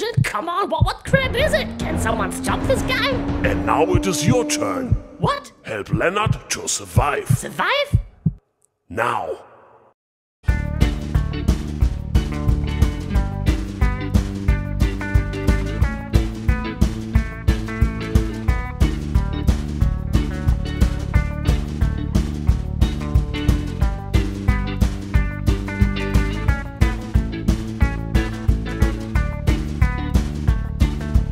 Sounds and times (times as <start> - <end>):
Music: 1.1 - 5.4, 10.4 - 31.3.